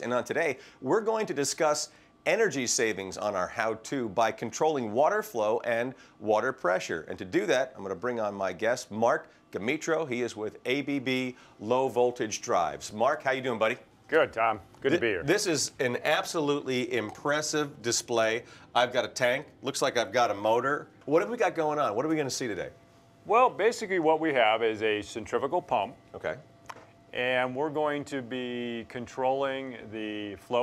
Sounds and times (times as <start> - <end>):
Speech: 0.0 - 26.4, 27.2 - 30.6.